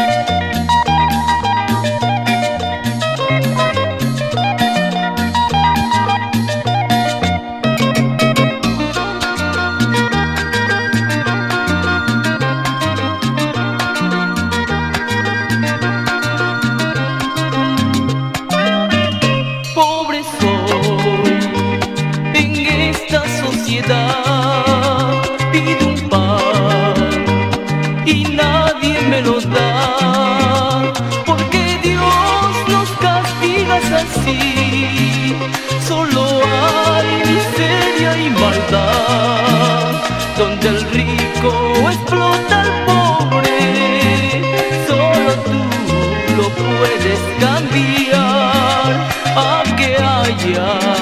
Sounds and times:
Music: 0:00.0 - 0:51.0.

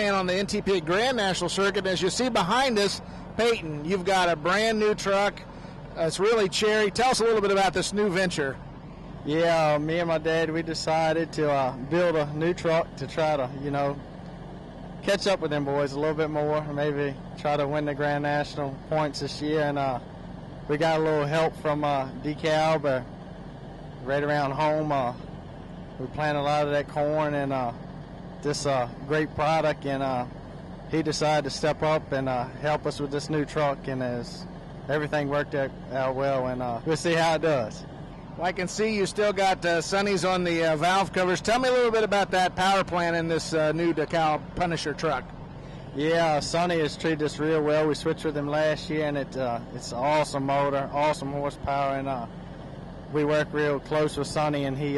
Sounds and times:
Speech: 0:00.0 - 0:08.6, 0:09.2 - 0:14.0, 0:15.0 - 0:20.1, 0:20.7 - 0:23.1, 0:24.0 - 0:25.2, 0:26.0 - 0:27.8, 0:28.4 - 0:45.3, 0:46.0 - 0:52.3, 0:53.1 - 0:54.9.

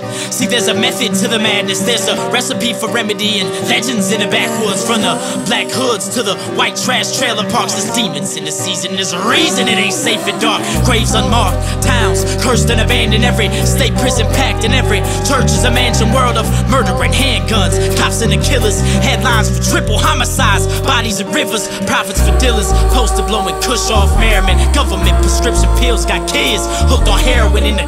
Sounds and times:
Soundtrack music: 0:09.2 - 0:27.8
Theme music: 0:09.4 - 0:20.4.

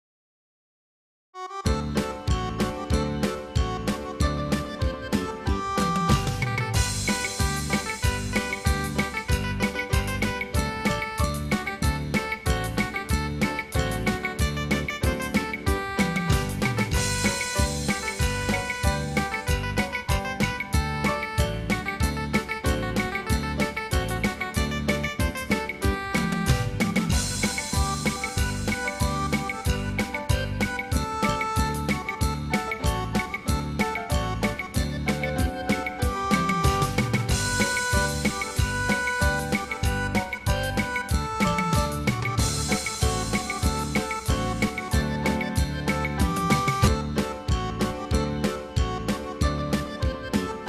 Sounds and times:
Music: 0:01.4 - 0:50.6.

